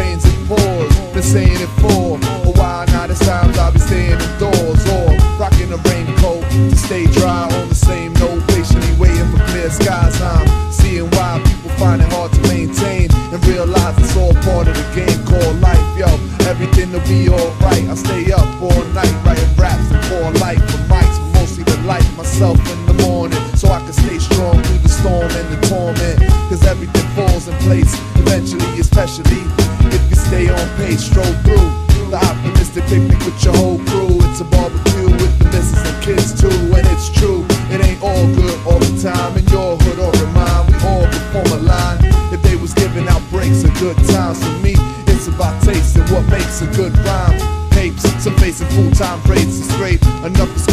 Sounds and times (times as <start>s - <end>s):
Music: 0.0s - 50.7s.